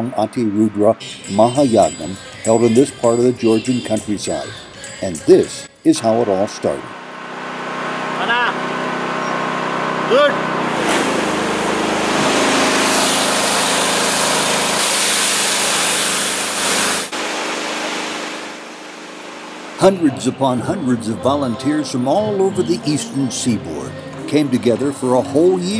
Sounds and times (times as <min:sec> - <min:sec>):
Speech: 0:00.0 - 0:06.9, 0:19.8 - 0:25.7
Music: 0:01.0 - 0:06.0, 0:19.8 - 0:25.7.